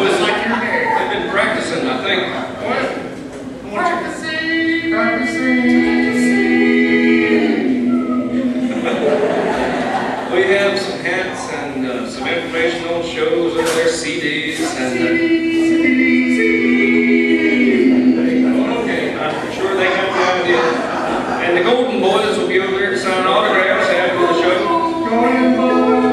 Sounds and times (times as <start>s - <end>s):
Speech: 0.0s - 6.4s, 10.3s - 15.8s, 18.2s - 26.1s.